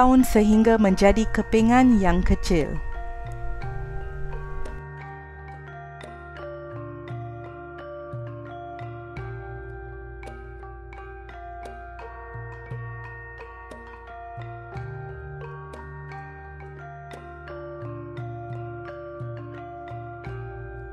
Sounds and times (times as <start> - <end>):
Speech: 0.0 - 2.8
Music: 0.0 - 20.9.